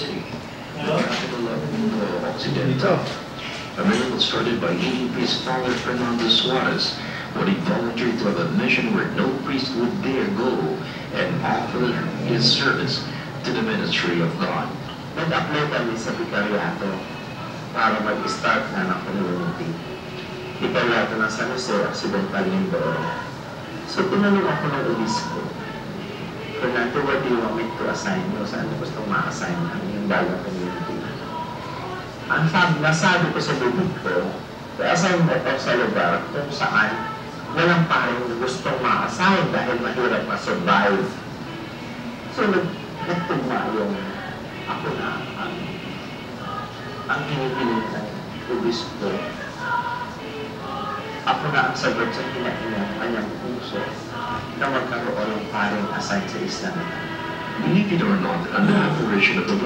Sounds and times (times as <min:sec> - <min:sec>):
Speech: 0:00.0 - 0:41.2, 0:42.3 - 0:45.8, 0:46.4 - 0:49.8, 0:50.7 - 0:59.6.